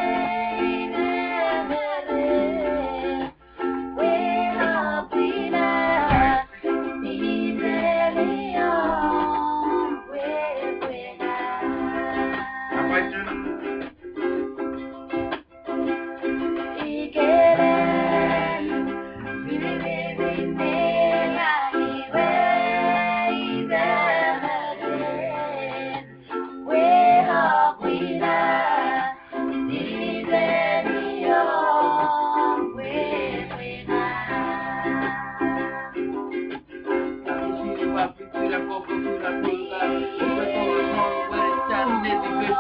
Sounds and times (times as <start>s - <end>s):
Music: 0.0s - 42.6s.